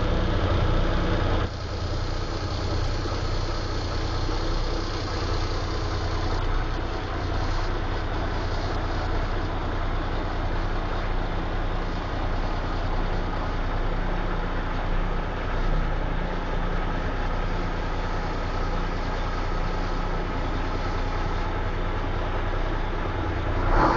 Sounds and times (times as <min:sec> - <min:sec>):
Truck: 0:00.0 - 0:23.9.